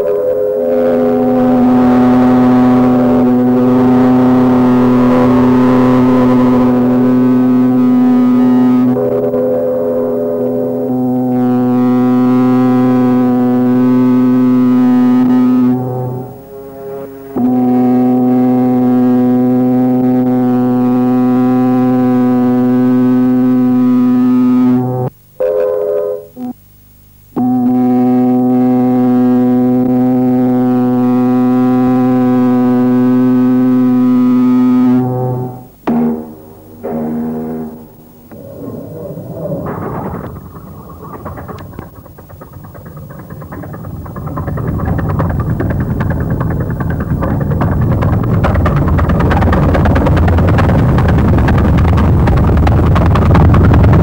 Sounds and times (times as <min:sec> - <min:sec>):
Ship: 0:37.7 - 0:54.0.